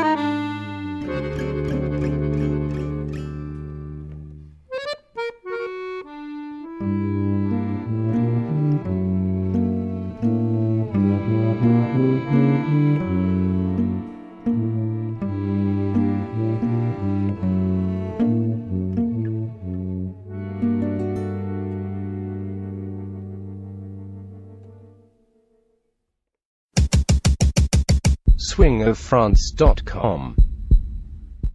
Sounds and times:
Accordion: 0.0 - 24.9
Speech: 28.4 - 30.4.

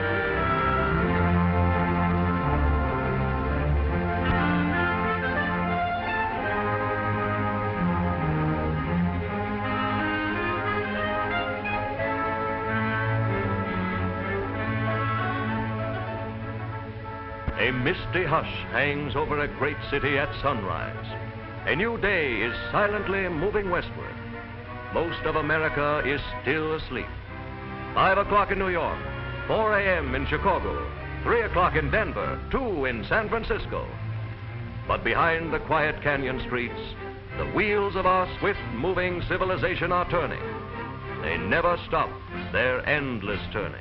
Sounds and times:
Music: 0.0 - 43.8
Speech: 17.6 - 24.2, 25.0 - 27.1, 28.0 - 34.0, 34.9 - 40.5, 41.2 - 43.8.

